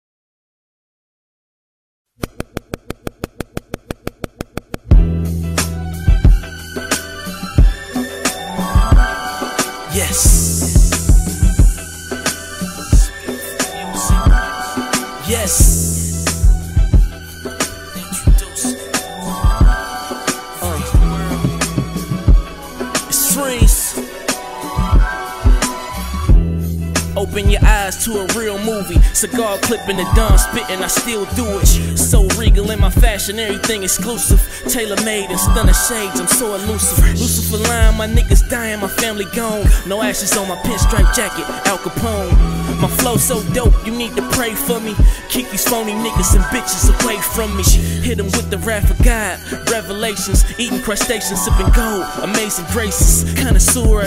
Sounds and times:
Music: 0:04.2 - 0:54.0.

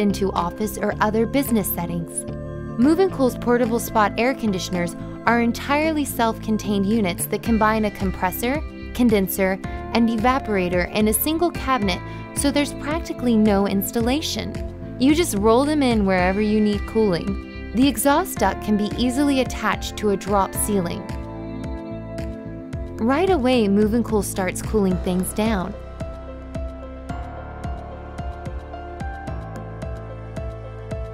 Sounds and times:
Speech: 0:00.0 - 0:02.2, 0:02.8 - 0:21.1, 0:23.0 - 0:25.8
Music: 0:00.0 - 0:31.1.

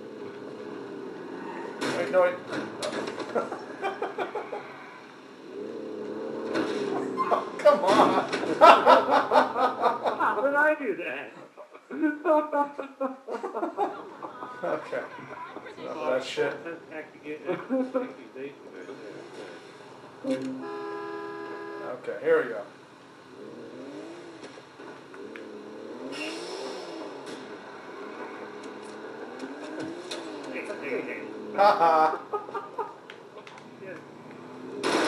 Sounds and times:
Vehicle: 0:00.0 - 0:35.0.

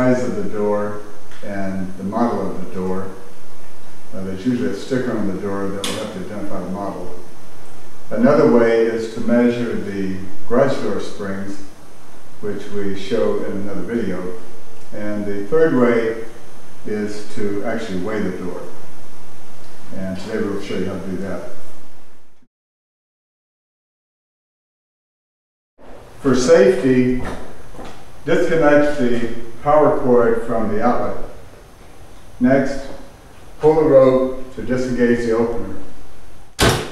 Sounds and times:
Speech: 0:00.0 - 0:03.2, 0:04.1 - 0:07.2, 0:08.1 - 0:11.8, 0:12.4 - 0:18.8, 0:19.9 - 0:21.6, 0:26.2 - 0:27.5, 0:28.2 - 0:31.4, 0:32.4 - 0:36.0.

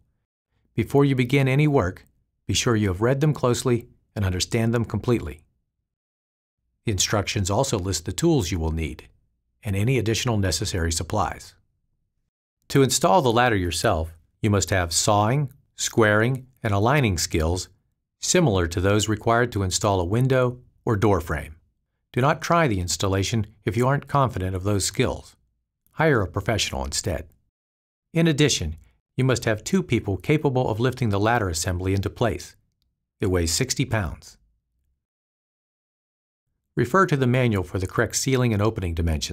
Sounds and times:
Speech: 0:00.8 - 0:05.5, 0:06.8 - 0:11.6, 0:12.7 - 0:21.6, 0:22.2 - 0:25.4, 0:26.0 - 0:27.4, 0:28.2 - 0:32.6, 0:33.2 - 0:34.4, 0:36.8 - 0:39.3.

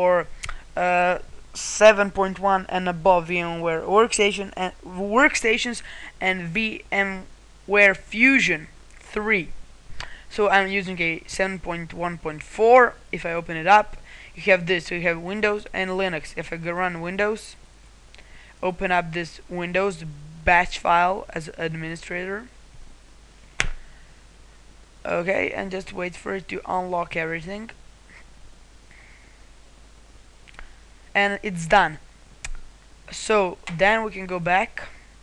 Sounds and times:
Speech: 0:00.0 - 0:09.6, 0:10.3 - 0:17.6, 0:18.6 - 0:22.6, 0:25.0 - 0:27.8, 0:31.2 - 0:32.1, 0:33.1 - 0:35.0
Inside, small room: 0:00.0 - 0:35.2.

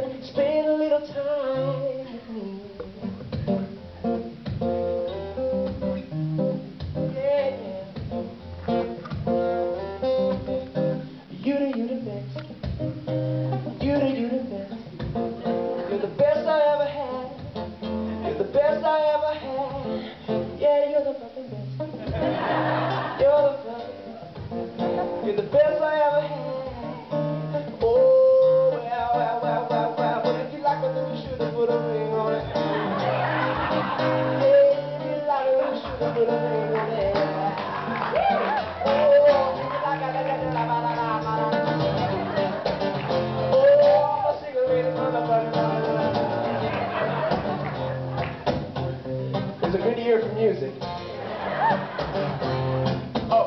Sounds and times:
Music: 0:00.0 - 0:53.4.

